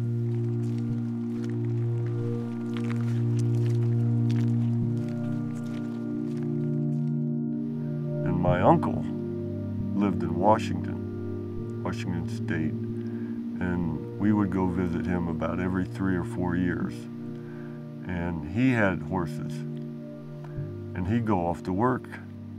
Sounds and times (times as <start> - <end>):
Music: 0.0 - 22.5
Speech: 8.2 - 9.1, 10.0 - 11.0, 11.8 - 12.8, 13.6 - 17.1, 18.1 - 19.7, 21.0 - 22.3.